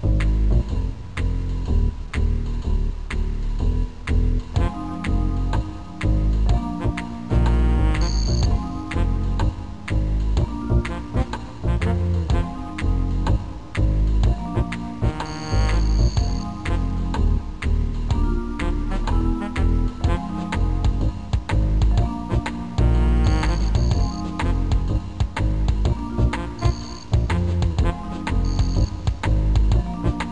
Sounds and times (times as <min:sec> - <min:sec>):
Rhythm and blues: 0:00.0 - 0:30.3.